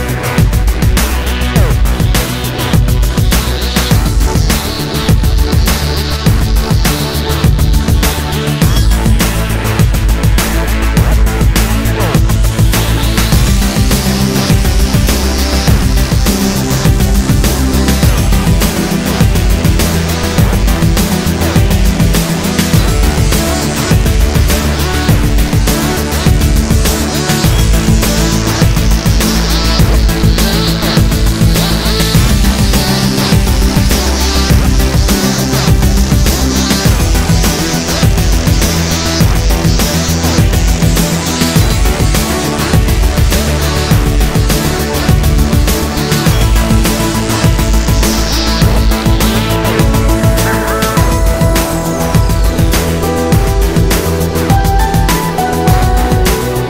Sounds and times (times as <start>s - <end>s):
Music: 0.0s - 56.6s.